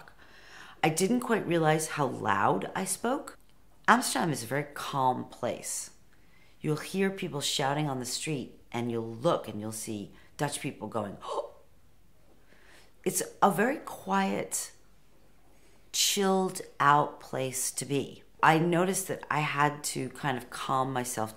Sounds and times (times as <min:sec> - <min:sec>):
Speech: 0:00.8 - 0:06.0, 0:06.6 - 0:11.6, 0:13.0 - 0:14.8, 0:16.0 - 0:21.3.